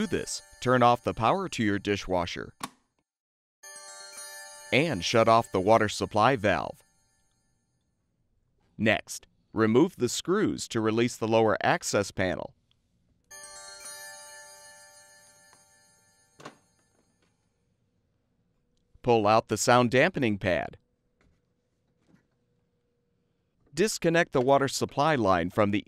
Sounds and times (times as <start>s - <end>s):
Speech: 0.0s - 2.5s, 4.7s - 6.8s, 8.8s - 12.6s, 19.0s - 20.8s, 23.7s - 25.8s.